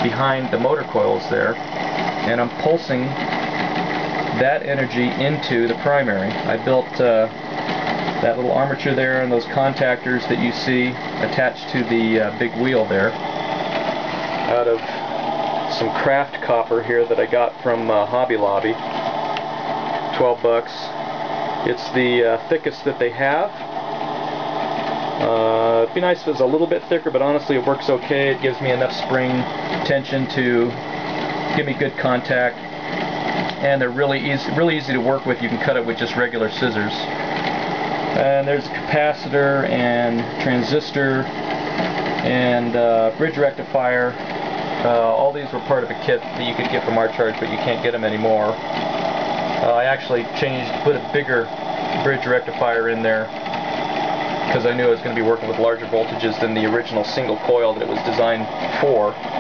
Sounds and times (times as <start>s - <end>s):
Speech: 0.0s - 1.6s, 2.2s - 3.2s, 4.3s - 7.4s, 8.2s - 13.2s, 14.5s - 15.0s, 15.7s - 18.8s, 20.1s - 21.0s, 21.6s - 23.6s, 25.2s - 30.8s, 31.5s - 32.6s, 33.6s - 37.2s, 38.2s - 41.3s, 42.2s - 44.2s, 44.8s - 48.6s, 49.6s - 53.4s, 54.5s - 59.2s.